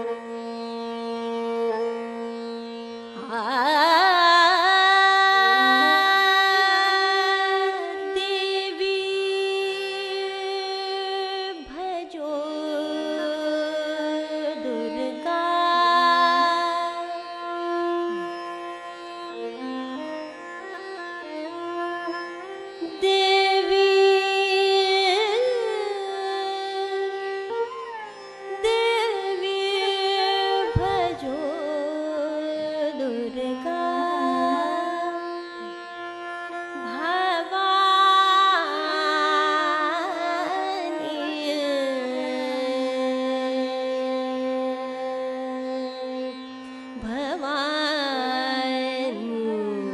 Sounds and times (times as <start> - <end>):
Carnatic music: 0.0 - 49.9
Singing: 28.6 - 35.2.